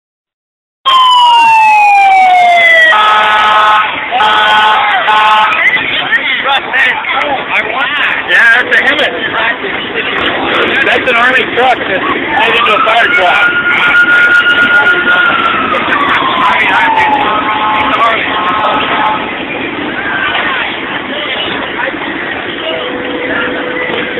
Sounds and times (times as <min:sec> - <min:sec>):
Siren: 0:00.8 - 0:05.7, 0:12.0 - 0:19.6
Emergency vehicle: 0:00.8 - 0:06.9, 0:08.3 - 0:24.1.